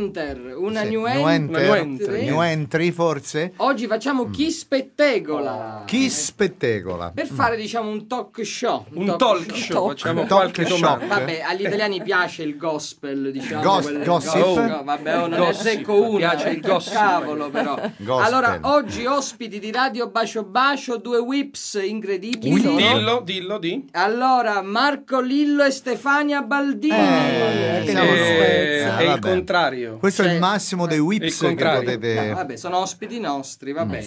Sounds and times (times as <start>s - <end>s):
Speech: 0.0s - 34.0s.